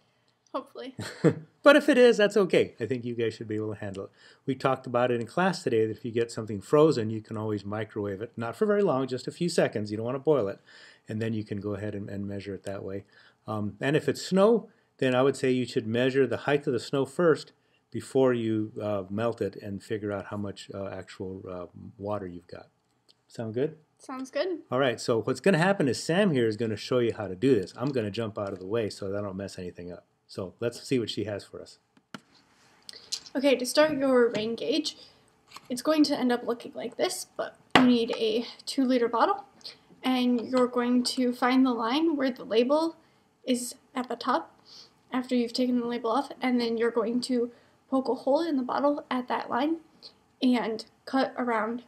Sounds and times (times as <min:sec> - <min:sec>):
Speech: 0:00.6 - 0:22.7, 0:23.3 - 0:31.8, 0:33.3 - 0:35.0, 0:50.4 - 0:51.8.